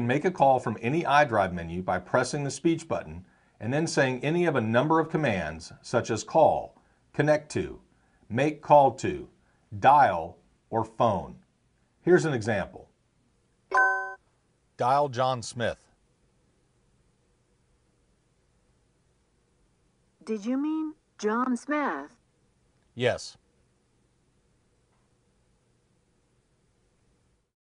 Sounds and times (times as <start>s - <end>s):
Speech: 0.0s - 11.4s, 12.0s - 12.9s, 14.8s - 15.9s, 20.2s - 22.2s, 23.0s - 23.4s.